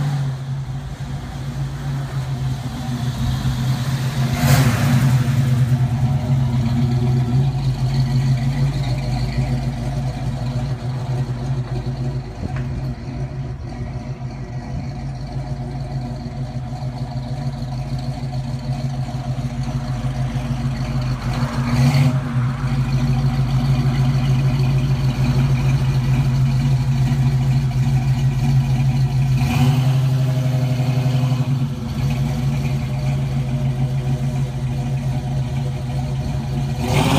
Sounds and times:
Car: 0.0 - 37.1
Engine: 0.0 - 37.1.

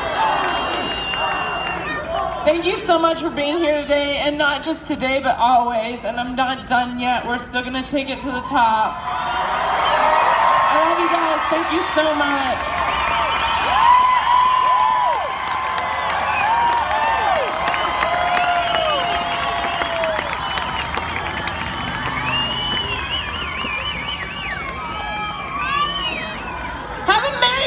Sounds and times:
Female speech, woman speaking: 2.5 - 8.9, 10.7 - 12.7, 27.1 - 27.6.

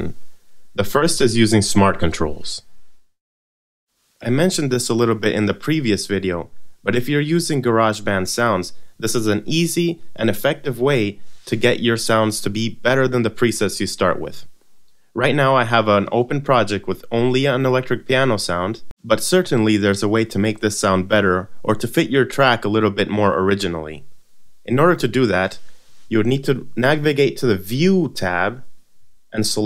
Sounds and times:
Speech: 0.0 - 0.2, 0.8 - 2.7, 4.2 - 14.5, 15.2 - 24.1, 24.7 - 28.7, 29.4 - 29.6.

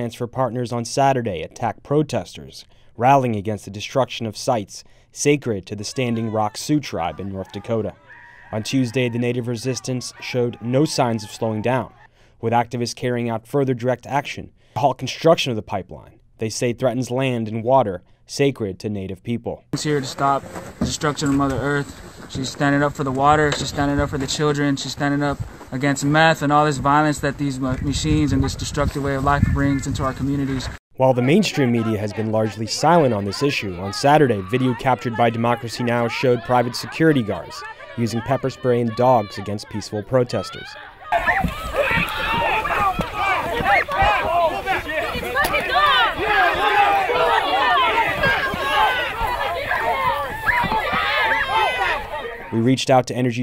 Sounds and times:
Speech: 0.0 - 40.9, 51.0 - 53.4.

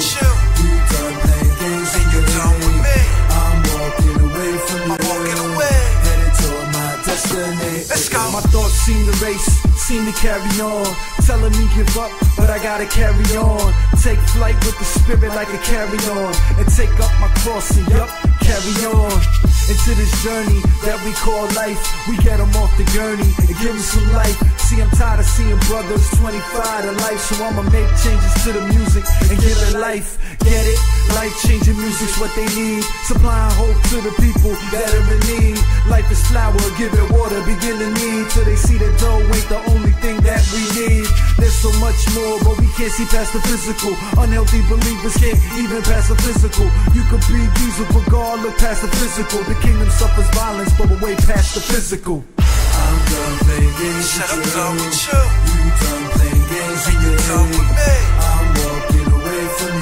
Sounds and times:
Hip hop music: 0.0 - 59.8
Rapping: 0.0 - 59.8.

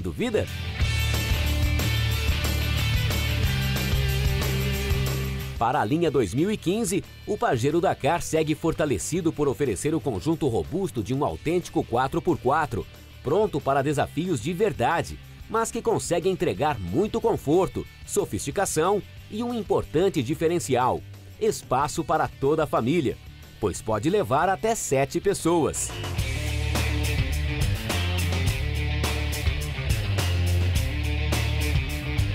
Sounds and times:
Speech: 0.0 - 0.5, 5.6 - 26.0
Music: 0.0 - 32.3.

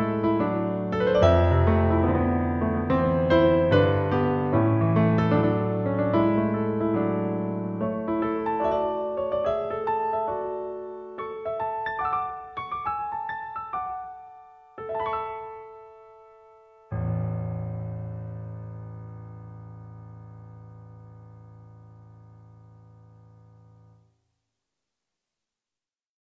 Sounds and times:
Piano: 0.0 - 24.3.

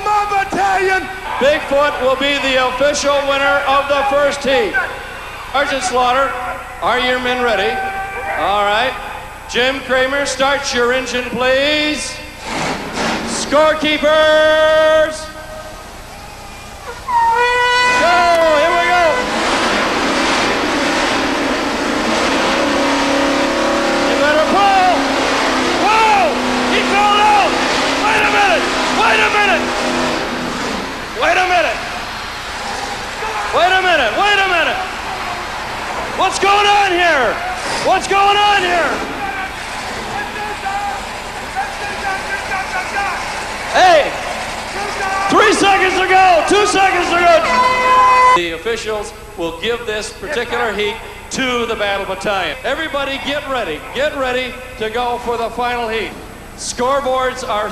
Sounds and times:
Speech: 0.0 - 12.3, 13.3 - 15.4, 17.4 - 19.3, 24.1 - 25.0, 25.8 - 29.7, 31.2 - 31.9, 33.2 - 35.4, 36.2 - 44.2, 44.8 - 47.7, 48.4 - 57.7.

